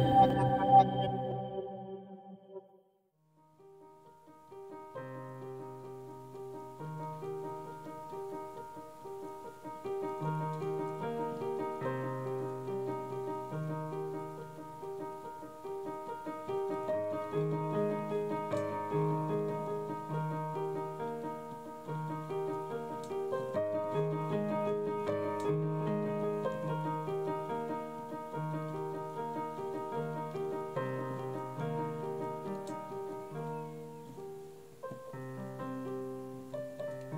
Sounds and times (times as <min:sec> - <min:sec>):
Music: 0:00.0 - 0:37.1.